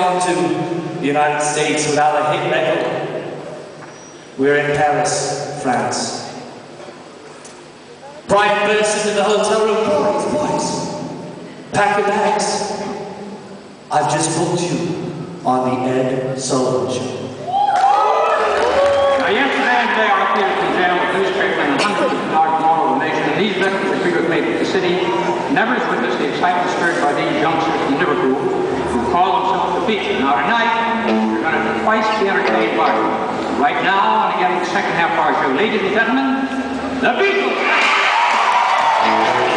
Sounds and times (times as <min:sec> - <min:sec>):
Speech: 0:00.0 - 0:03.1, 0:04.4 - 0:06.4, 0:08.0 - 0:11.0, 0:11.7 - 0:13.1, 0:13.9 - 0:17.2, 0:19.2 - 0:37.6.